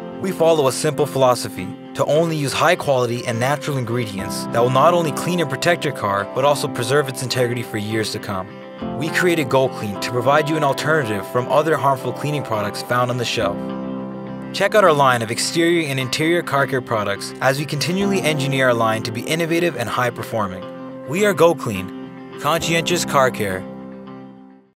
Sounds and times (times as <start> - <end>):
Music: 0.0 - 24.7
Speech: 0.2 - 13.6, 14.5 - 23.7.